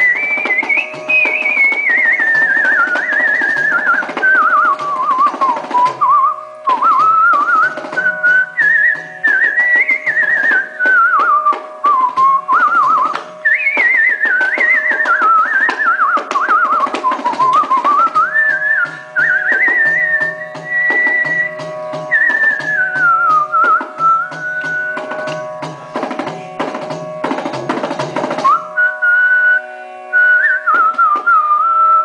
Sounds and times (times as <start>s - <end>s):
Whistling: 0.0s - 25.5s, 28.4s - 32.0s
Carnatic music: 0.0s - 32.0s
Classical music: 0.0s - 32.0s.